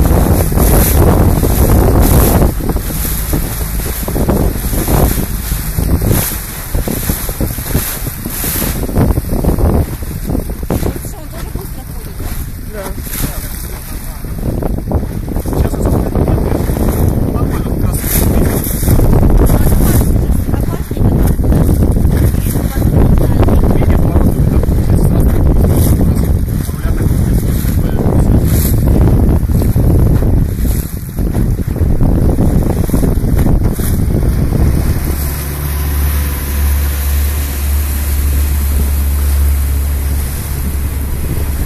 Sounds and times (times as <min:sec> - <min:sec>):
Boat, Water vehicle: 0:00.0 - 0:41.6
Speech: 0:10.8 - 0:14.3, 0:15.5 - 0:18.8, 0:19.4 - 0:21.5, 0:22.2 - 0:28.5.